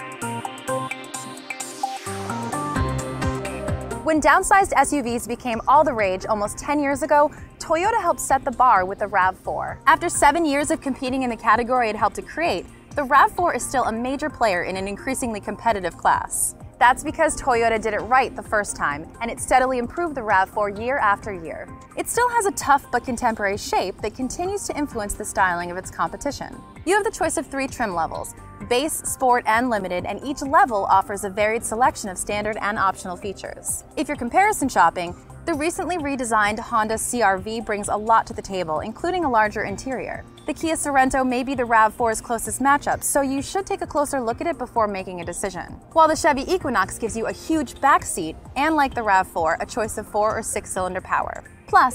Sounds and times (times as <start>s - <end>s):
Music: 0.0s - 51.9s
Speech: 4.1s - 51.9s.